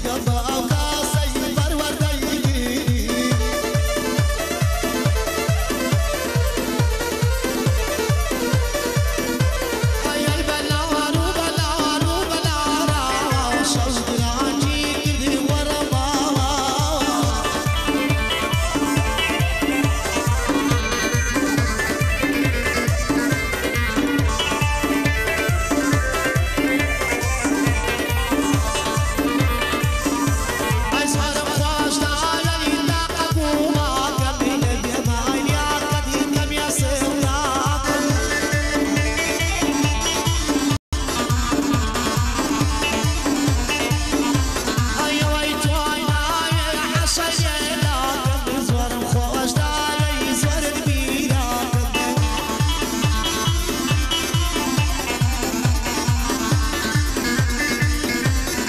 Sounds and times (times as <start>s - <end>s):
Music: 0.0s - 58.6s.